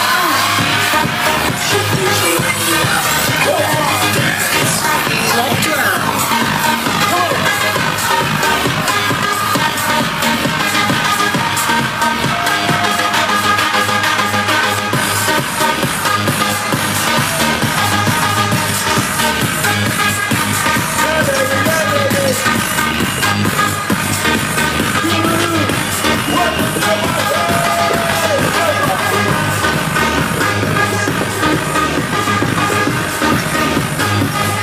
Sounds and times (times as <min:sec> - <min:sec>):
Techno: 0:00.0 - 0:34.6.